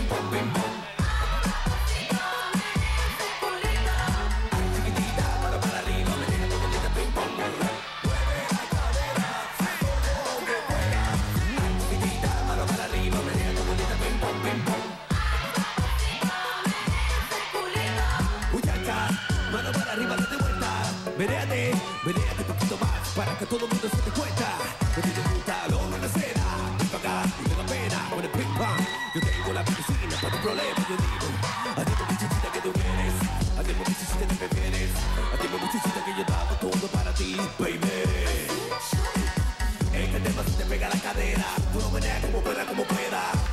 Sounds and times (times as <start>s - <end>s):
Music: 0.0s - 43.5s.